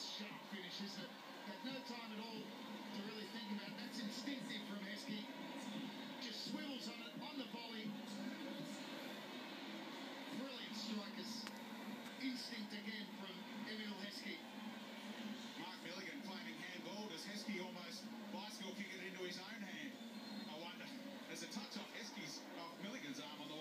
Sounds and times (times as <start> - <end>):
Speech: 0.0 - 5.3, 6.2 - 8.8, 20.5 - 23.6.